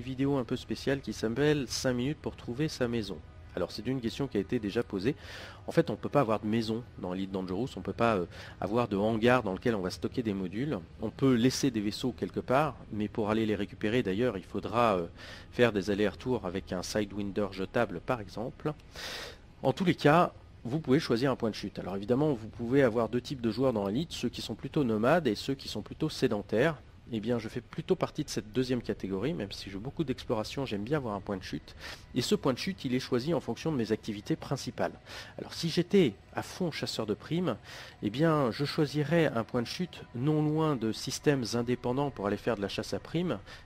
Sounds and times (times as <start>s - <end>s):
Speech: 0.0s - 18.8s, 19.6s - 43.5s.